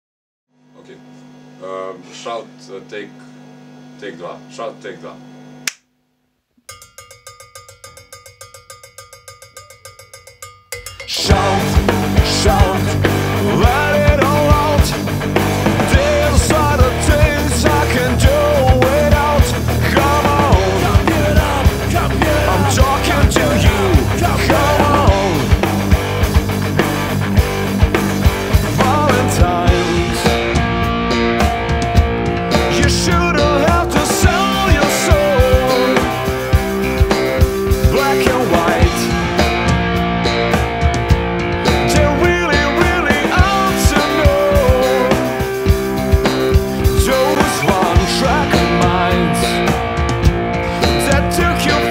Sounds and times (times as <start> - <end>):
Music: 6.8 - 51.9.